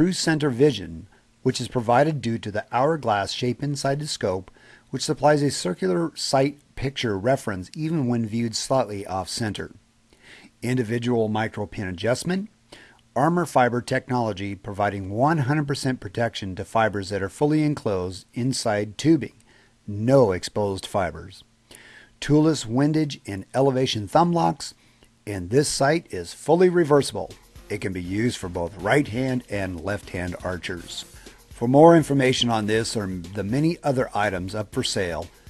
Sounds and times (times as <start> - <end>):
Speech: 0.0 - 9.8, 10.6 - 12.6, 13.2 - 21.5, 22.2 - 35.3.